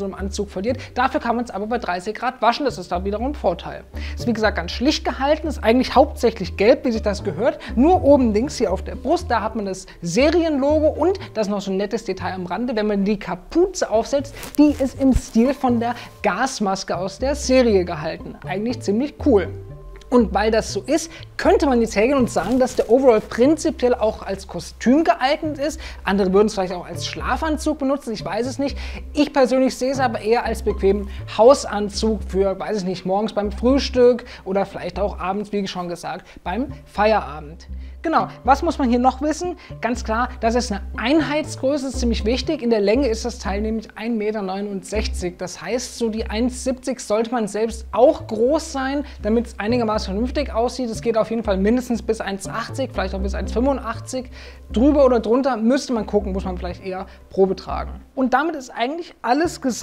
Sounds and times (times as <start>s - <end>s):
Music: 0.0s - 59.8s
Speech: 0.0s - 59.8s.